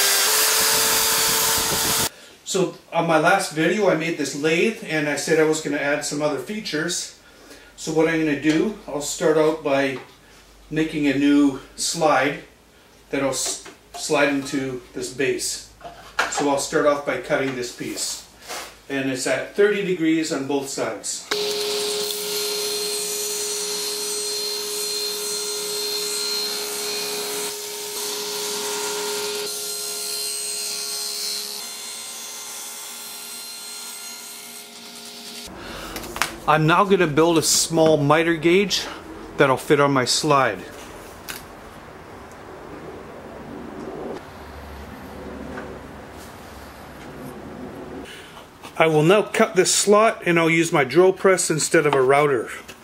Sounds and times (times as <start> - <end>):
Power tool: 0.0 - 2.1, 21.3 - 35.6.